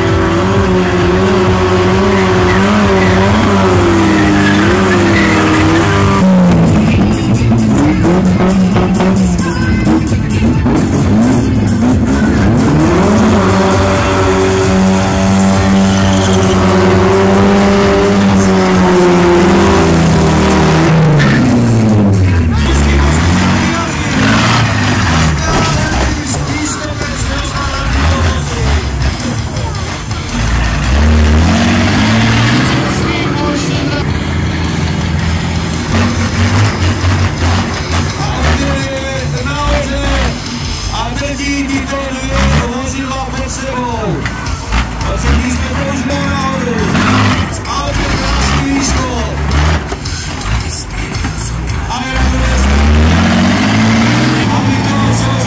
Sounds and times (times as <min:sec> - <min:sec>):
Car: 0:00.0 - 0:55.4
Music: 0:00.0 - 0:55.4
Truck: 0:00.0 - 0:55.4
Speech: 0:08.9 - 0:12.3, 0:22.2 - 0:30.2, 0:32.9 - 0:34.1, 0:38.1 - 0:49.6, 0:50.5 - 0:52.8, 0:54.4 - 0:55.4.